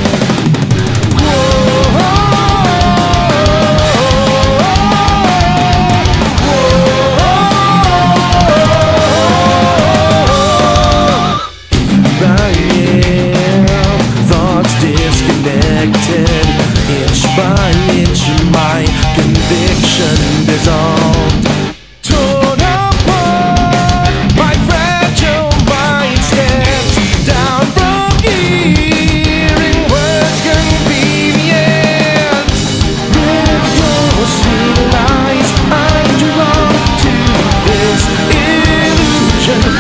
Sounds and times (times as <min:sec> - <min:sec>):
Rhythm and blues: 0:00.0 - 0:39.8
Ska: 0:00.0 - 0:39.8.